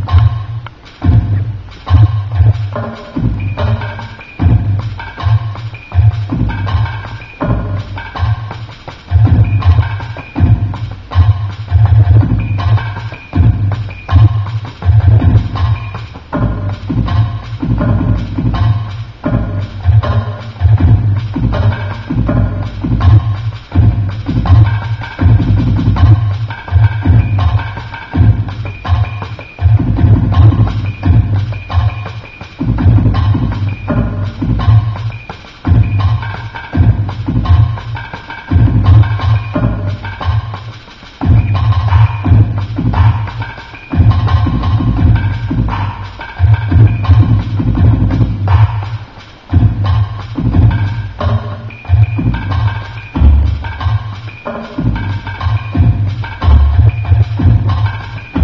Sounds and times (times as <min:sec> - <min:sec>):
Bass drum: 0:00.0 - 0:58.4
Drum machine: 0:00.0 - 0:58.4.